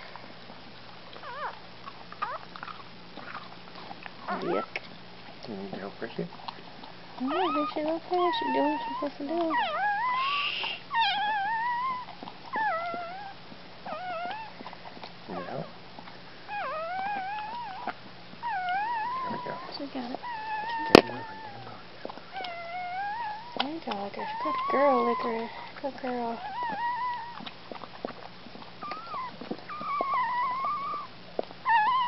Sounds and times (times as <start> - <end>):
Dog: 0.0 - 32.0.